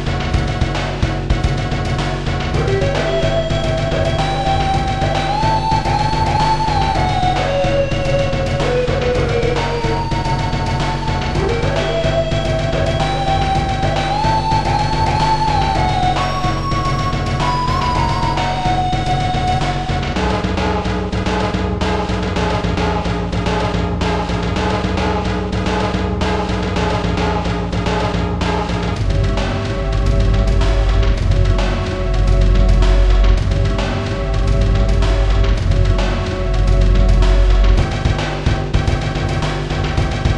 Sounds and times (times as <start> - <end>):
Background music: 0.0 - 40.3.